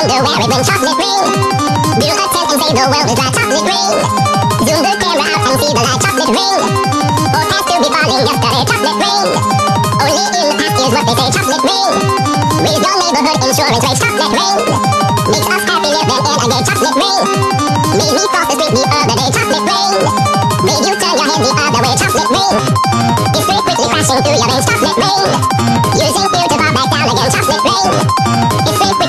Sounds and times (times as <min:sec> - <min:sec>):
Music: 0:00.0 - 0:29.0.